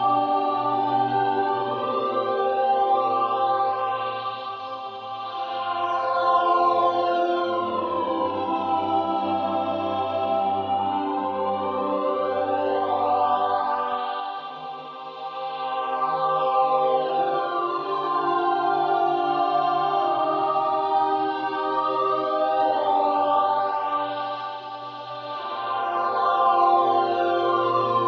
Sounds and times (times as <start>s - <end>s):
Music: 0.0s - 28.0s.